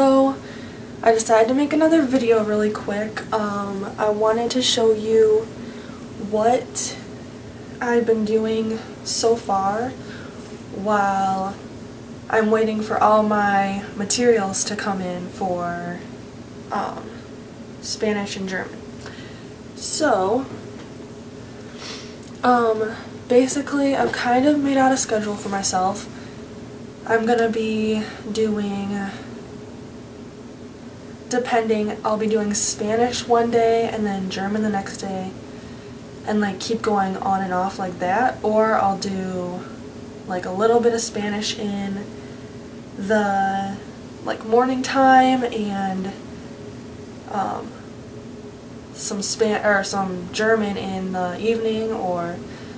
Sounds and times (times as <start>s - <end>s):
Speech: 0.0s - 0.4s, 1.0s - 5.5s, 6.2s - 7.1s, 7.8s - 10.0s, 10.7s - 11.6s, 12.3s - 16.1s, 16.7s - 17.2s, 17.8s - 18.8s, 19.8s - 20.6s, 22.4s - 26.1s, 27.1s - 29.3s, 31.3s - 35.4s, 36.2s - 39.7s, 40.3s - 42.1s, 43.0s - 46.2s, 47.3s - 47.8s, 49.0s - 52.5s.